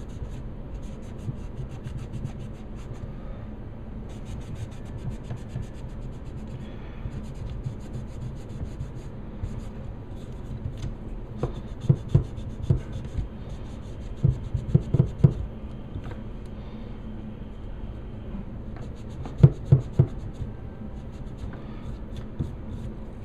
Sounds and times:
Inside, small room: 0.0s - 23.2s.

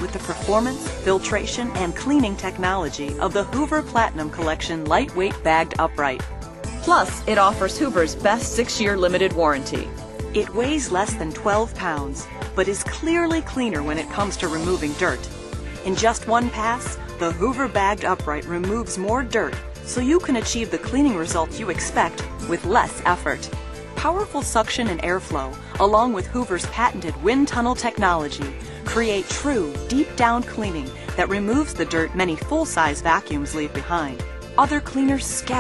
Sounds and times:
Speech: 0.0s - 6.2s, 6.8s - 35.6s
Music: 0.0s - 35.6s.

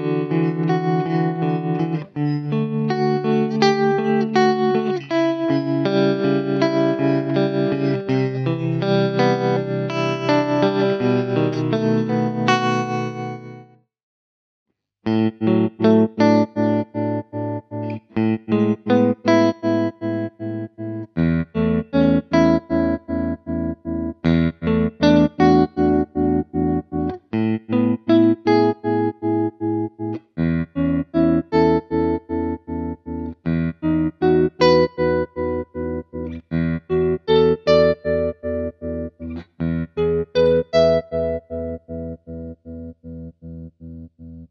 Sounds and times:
Distortion: 0.0s - 13.8s, 15.1s - 44.5s
Electric guitar: 0.0s - 13.8s, 15.1s - 44.5s
Effects unit: 0.0s - 13.9s, 15.0s - 44.5s.

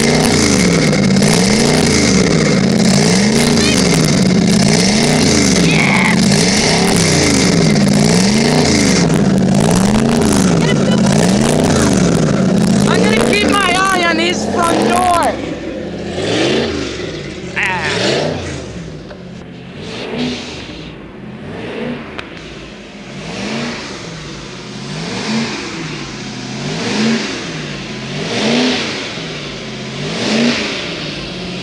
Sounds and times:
Accelerating, revving, vroom: 0.0s - 17.1s, 17.8s - 18.8s, 19.8s - 22.1s, 23.1s - 24.0s, 24.9s - 29.2s, 29.9s - 31.0s
Heavy engine (low frequency): 0.0s - 31.6s
Vehicle: 0.0s - 31.6s
Speech: 12.9s - 15.4s, 17.6s - 18.0s.

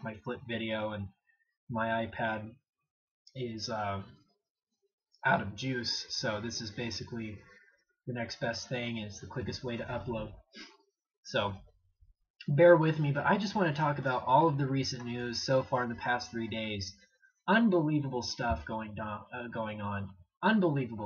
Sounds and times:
Speech: 0.0s - 2.6s, 3.4s - 4.2s, 5.2s - 10.5s, 11.3s - 11.7s, 12.4s - 21.0s.

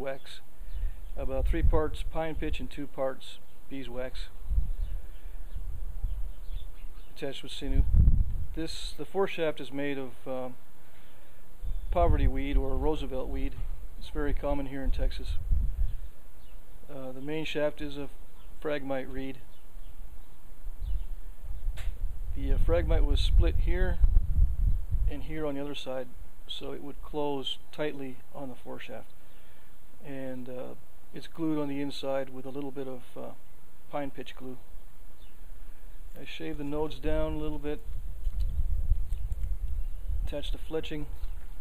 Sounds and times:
Speech: 0.0s - 0.5s, 1.2s - 4.4s, 7.2s - 7.9s, 8.6s - 10.6s, 11.9s - 15.4s, 16.9s - 19.5s, 22.4s - 24.0s, 25.1s - 29.1s, 30.0s - 34.6s, 36.2s - 37.8s, 40.3s - 41.1s.

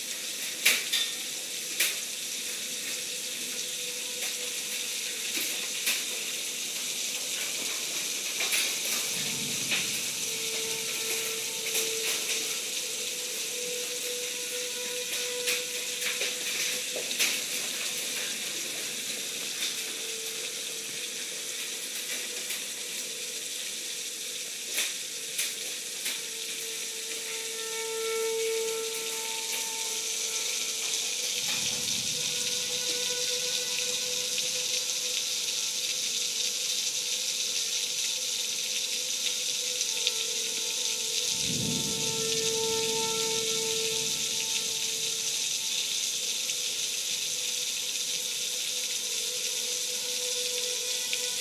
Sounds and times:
Rain: 0.0s - 51.4s.

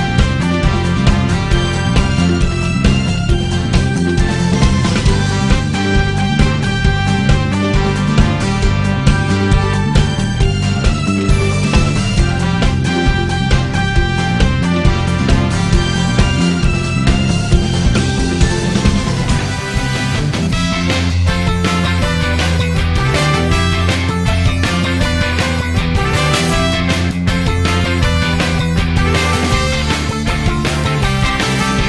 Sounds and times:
Music: 0.0s - 31.8s.

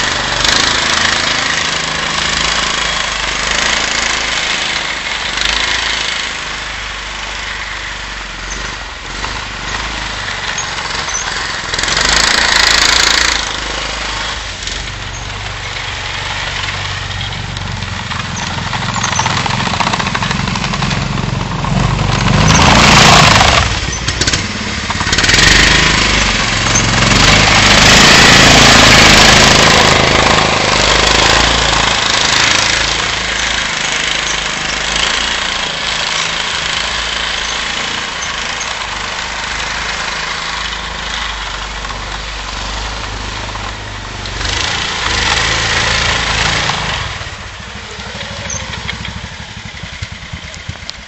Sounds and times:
Vehicle: 0.0s - 51.0s.

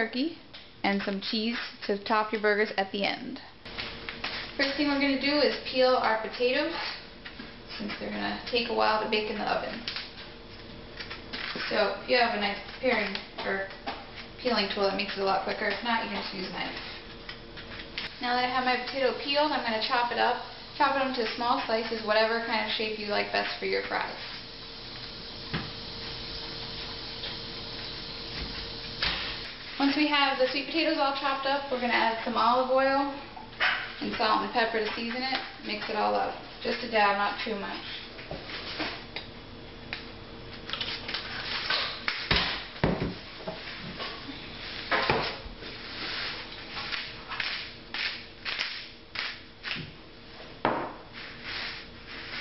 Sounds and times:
Speech: 0.0s - 3.5s, 4.6s - 7.0s, 7.7s - 9.9s, 11.7s - 13.8s, 14.4s - 16.9s, 18.2s - 24.2s, 29.8s - 33.3s, 34.0s - 38.1s.

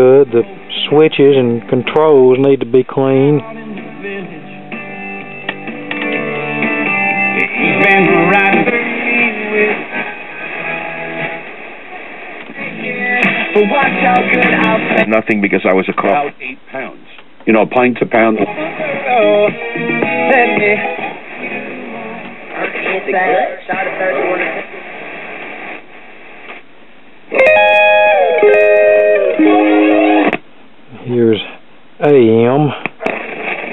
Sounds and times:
Speech: 0.0s - 3.4s, 15.1s - 18.4s, 30.9s - 32.8s
Music: 3.2s - 15.1s, 18.4s - 22.2s, 27.4s - 30.4s
Radio: 9.8s - 17.0s, 17.7s - 19.2s, 20.3s - 26.6s, 32.7s - 33.7s.

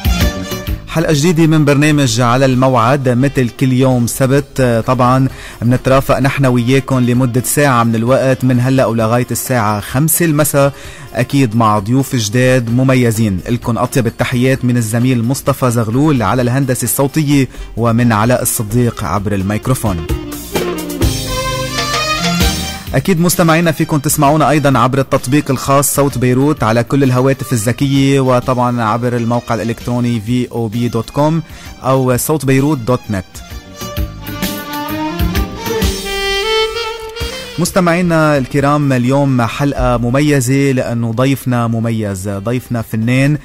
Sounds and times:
Music: 0.0s - 43.4s
Speech: 0.9s - 20.2s, 22.9s - 33.4s, 37.6s - 43.4s.

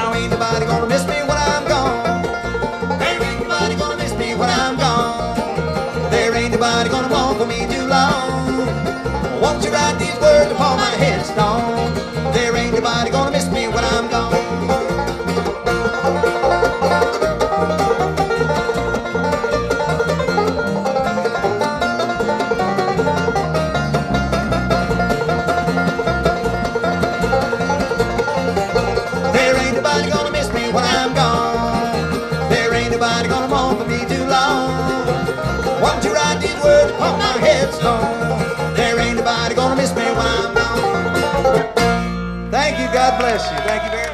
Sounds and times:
Musical instrument: 0.0s - 43.3s.

